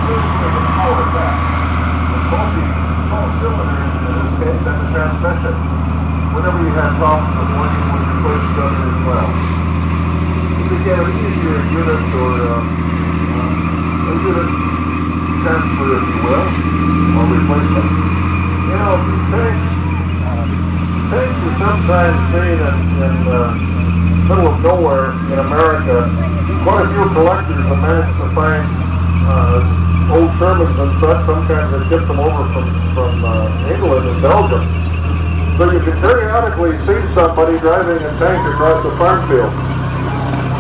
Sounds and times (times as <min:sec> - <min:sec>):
Speech: 0:00.0 - 0:01.4, 0:02.3 - 0:05.6, 0:06.4 - 0:09.4, 0:10.7 - 0:12.7, 0:13.3 - 0:14.6, 0:15.4 - 0:17.9, 0:18.7 - 0:23.7, 0:24.3 - 0:34.7, 0:35.6 - 0:39.6
Car: 0:00.0 - 0:40.6.